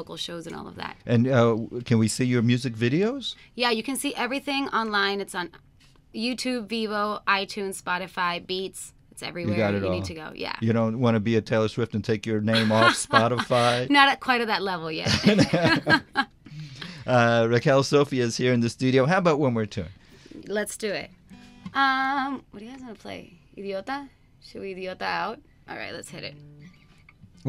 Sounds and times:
Speech: 0:00.4 - 0:05.1, 0:09.2 - 0:16.0, 0:17.1 - 0:19.9.

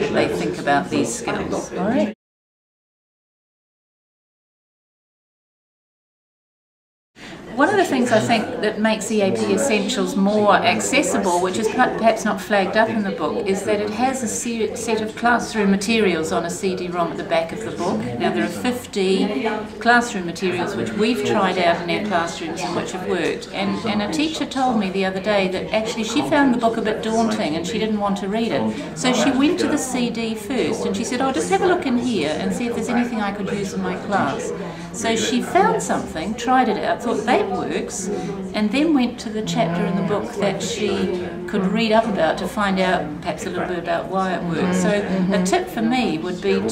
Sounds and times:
Conversation: 0:00.0 - 0:02.2, 0:07.6 - 0:46.7.

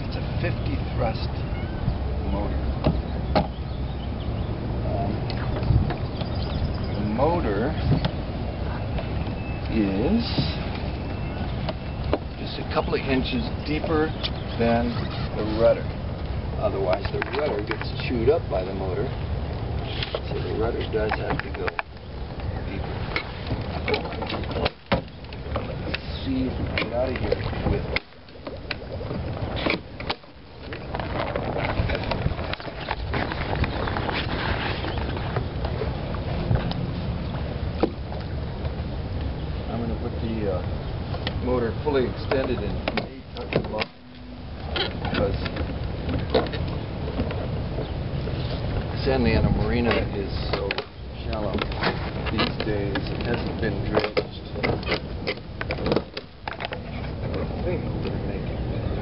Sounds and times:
Speech: 0:12.4 - 0:15.9, 0:16.6 - 0:19.2, 0:20.2 - 0:21.8, 0:39.7 - 0:40.7, 0:49.0 - 0:51.7, 0:52.3 - 0:54.7.

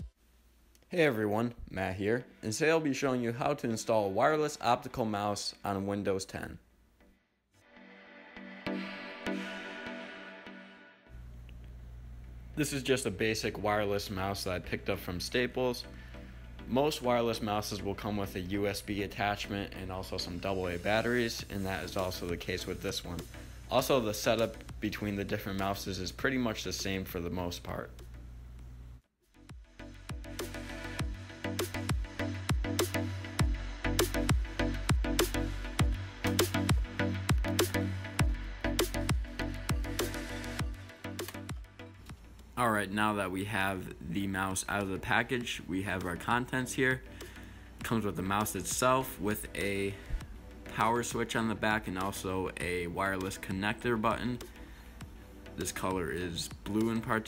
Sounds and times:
Speech: 0:00.9 - 0:06.6, 0:12.6 - 0:15.9, 0:16.7 - 0:28.0, 0:42.6 - 0:47.1, 0:47.8 - 0:50.0, 0:50.7 - 0:54.5, 0:55.6 - 0:57.2
Music: 0:07.0 - 0:57.2.

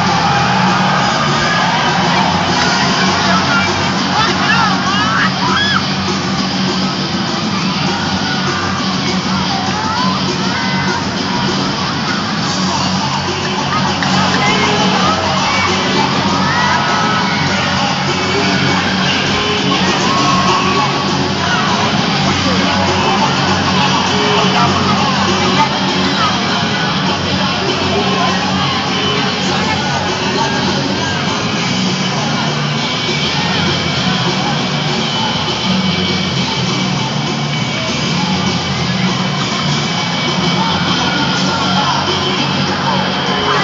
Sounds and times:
Music: 0:00.0 - 0:43.6
Speech: 0:00.0 - 0:43.6.

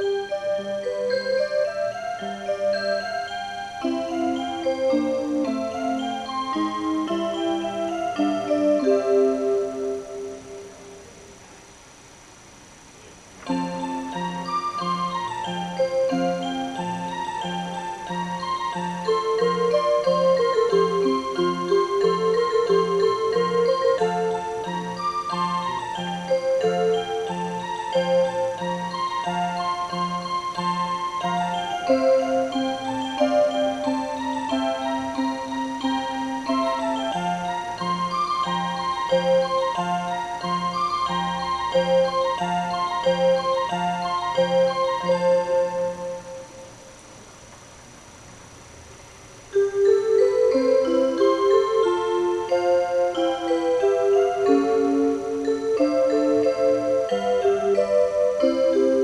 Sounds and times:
Music: 0:00.0 - 0:11.4, 0:13.3 - 0:47.0, 0:49.5 - 0:59.0.

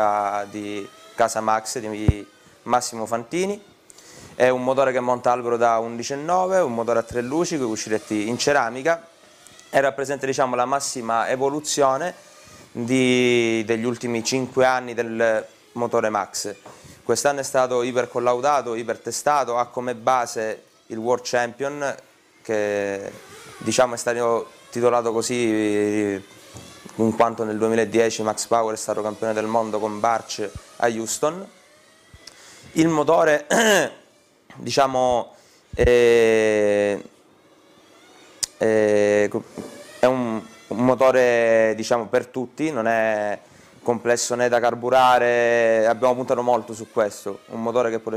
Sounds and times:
Speech: 0:00.0 - 0:03.7, 0:04.4 - 0:09.1, 0:09.7 - 0:12.2, 0:12.8 - 0:26.2, 0:27.0 - 0:31.5, 0:32.8 - 0:37.1, 0:38.4 - 0:48.1.

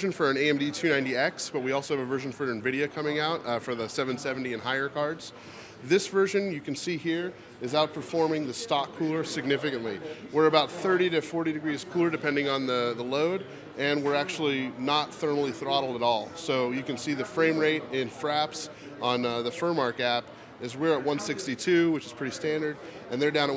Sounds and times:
Speech: 0:00.0 - 0:23.5.

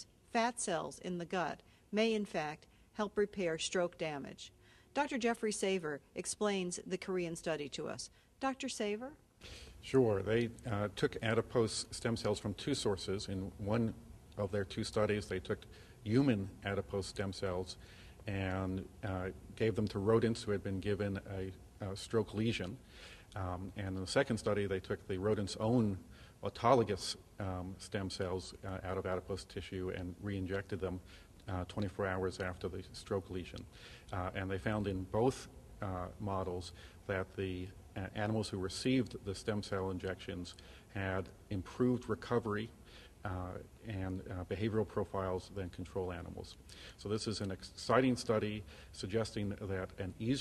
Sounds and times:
Speech: 0:00.0 - 0:09.2, 0:09.8 - 0:22.8, 0:23.4 - 0:50.4.

